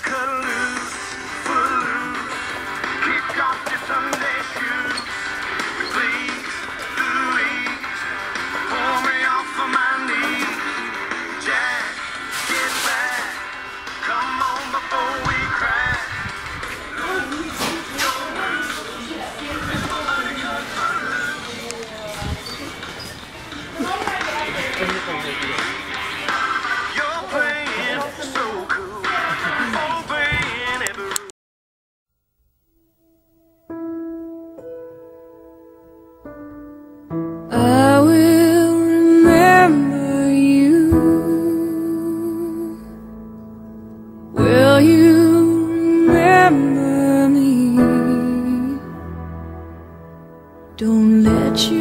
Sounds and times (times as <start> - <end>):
Inside, public space: 0.0 - 31.3, 32.5 - 51.8
Music: 0.0 - 31.3, 32.7 - 51.8.